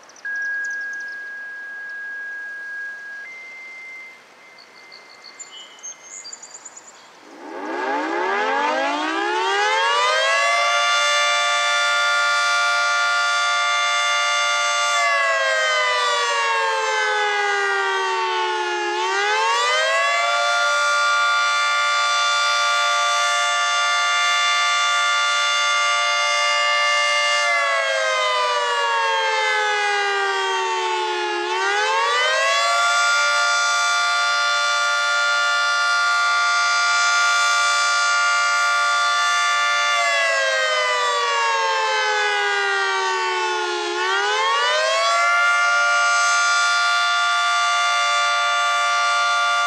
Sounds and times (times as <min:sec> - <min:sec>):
Air horn, truck horn: 0:07.5 - 0:15.3, 0:18.3 - 0:27.5, 0:30.8 - 0:40.1, 0:45.3 - 0:49.6.